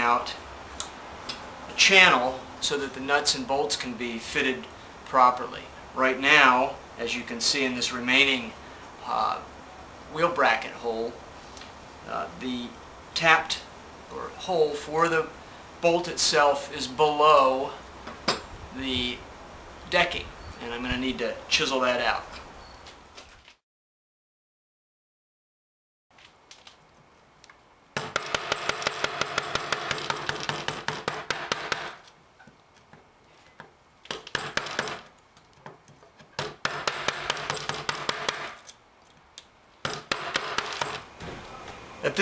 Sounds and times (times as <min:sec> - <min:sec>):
Speech: 0:00.0 - 0:00.4, 0:01.8 - 0:09.5, 0:10.1 - 0:11.2, 0:12.1 - 0:17.8, 0:18.8 - 0:19.2, 0:19.9 - 0:22.4, 0:42.0 - 0:42.2.